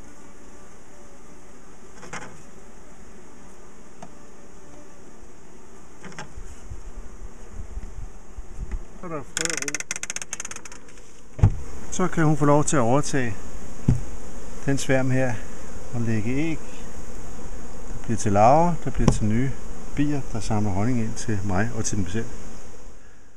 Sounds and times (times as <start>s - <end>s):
Bee, wasp, etc.: 0.0s - 23.3s
Fly, housefly: 0.0s - 23.3s.